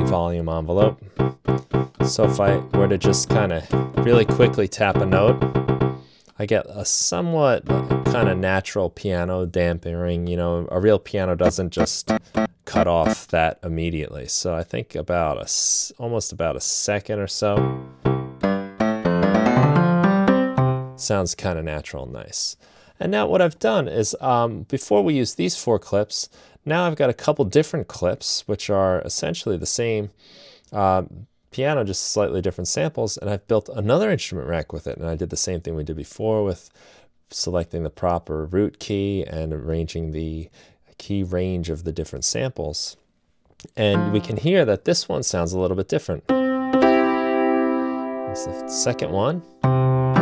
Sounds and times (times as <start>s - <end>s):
Speech: 0.0s - 1.1s, 2.1s - 5.4s, 6.4s - 12.1s, 12.7s - 17.6s, 21.0s - 43.0s, 43.6s - 46.3s, 48.3s - 49.5s
Sampler: 0.0s - 6.1s, 7.6s - 8.5s, 11.4s - 13.3s.